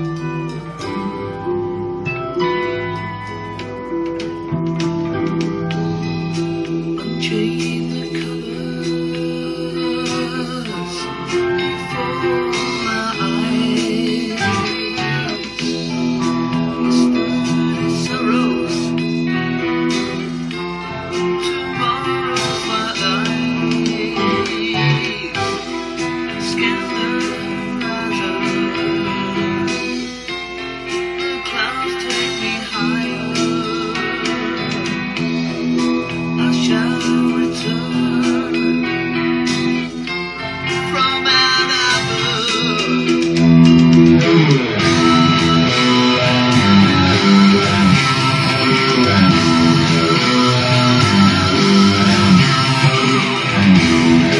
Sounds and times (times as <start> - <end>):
Electric guitar: 0.0 - 54.3.